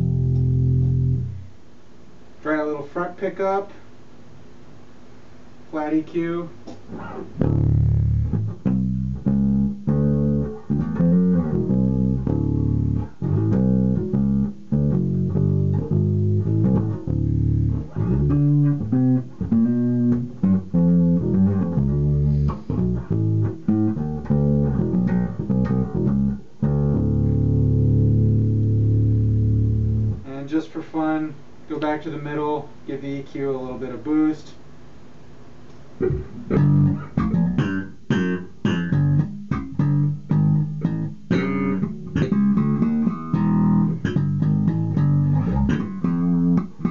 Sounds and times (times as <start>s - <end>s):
Bass guitar: 0.0s - 1.6s, 5.7s - 32.6s, 35.7s - 46.9s.